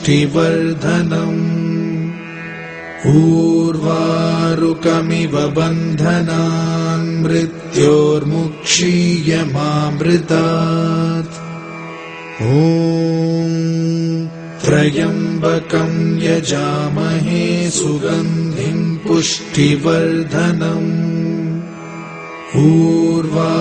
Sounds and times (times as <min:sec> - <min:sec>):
Mantra: 0:00.0 - 0:02.2, 0:03.0 - 0:11.4, 0:12.4 - 0:21.6, 0:22.5 - 0:23.6.